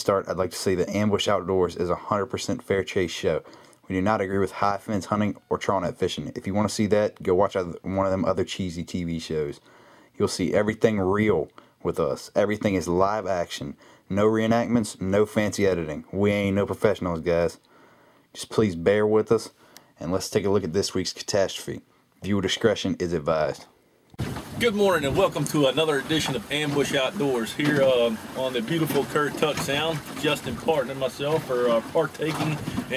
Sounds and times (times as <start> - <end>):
Speech: 0.0 - 9.6, 10.2 - 17.6, 18.4 - 23.8, 24.6 - 32.9.